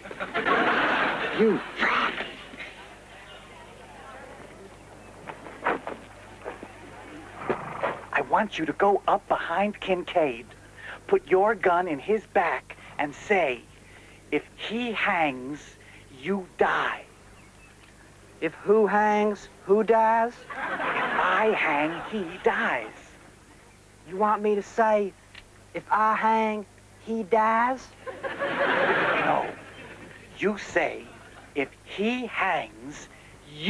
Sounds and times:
Speech: 8.1s - 13.7s, 14.3s - 17.1s, 18.4s - 23.2s, 24.1s - 25.2s, 25.8s - 28.0s, 29.0s - 29.6s, 30.4s - 33.7s.

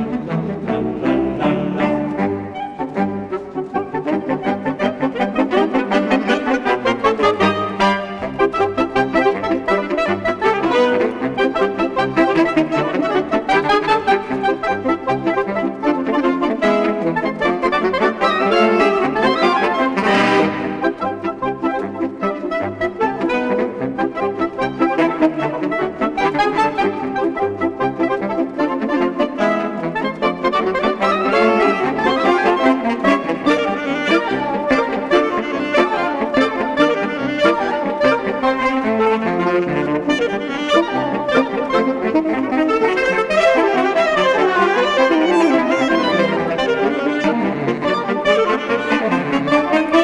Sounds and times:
Music: 0.0s - 50.0s.

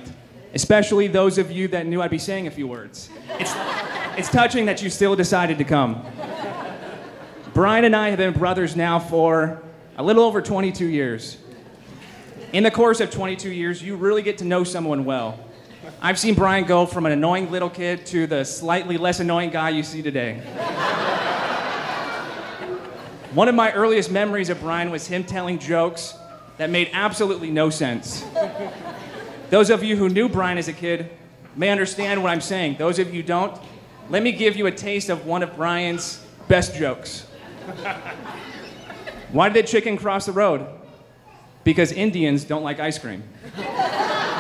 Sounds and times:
Male speech, man speaking: 0.0s - 3.1s, 4.2s - 6.0s, 7.6s - 11.4s, 12.5s - 15.4s, 16.0s - 20.4s, 23.4s - 28.3s, 29.5s - 37.3s, 39.3s - 40.8s, 41.6s - 43.3s
Narration, monologue: 0.0s - 22.0s, 23.0s - 44.4s.

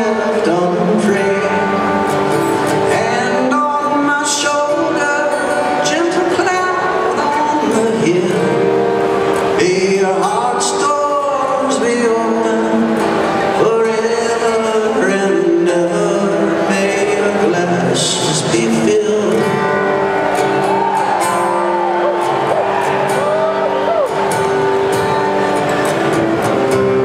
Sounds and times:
Music: 0.0s - 27.0s.

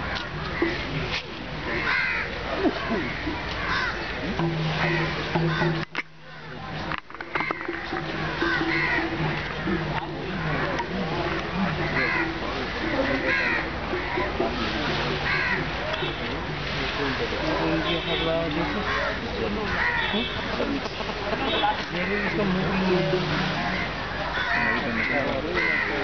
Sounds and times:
Speech: 9.6s - 26.0s.

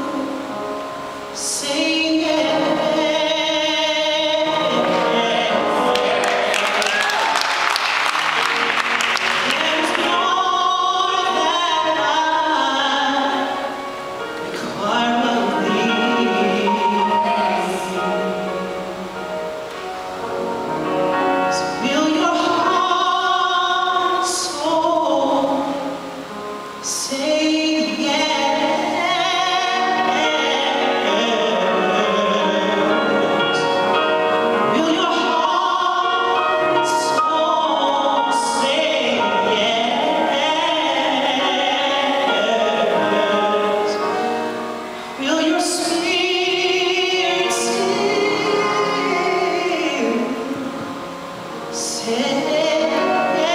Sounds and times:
Music: 0.0s - 53.5s
Male singing: 1.4s - 7.5s, 14.6s - 18.6s, 26.9s - 33.8s, 34.7s - 44.2s, 51.8s - 53.5s.

